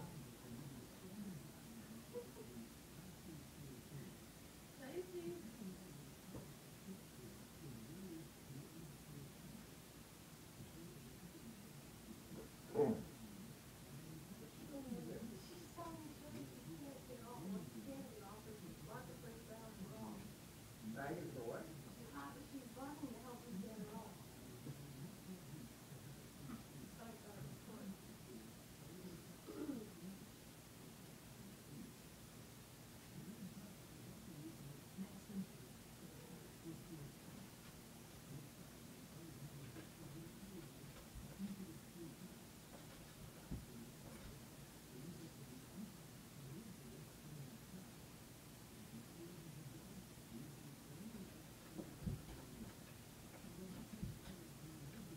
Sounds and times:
Speech: 0.0s - 9.8s, 10.6s - 30.3s, 33.0s - 37.5s, 38.2s - 42.5s, 48.7s - 55.1s.

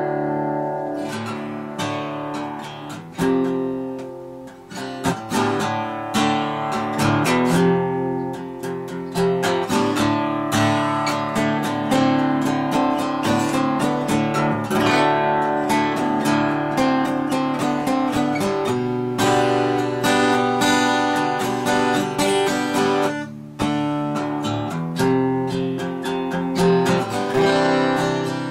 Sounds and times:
Acoustic guitar: 0.0s - 28.5s
Strum: 0.0s - 28.5s.

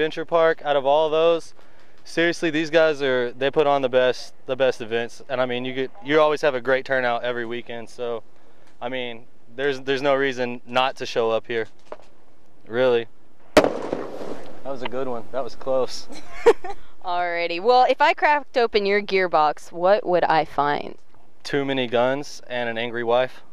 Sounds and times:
Explosion: 13.6s - 14.8s.

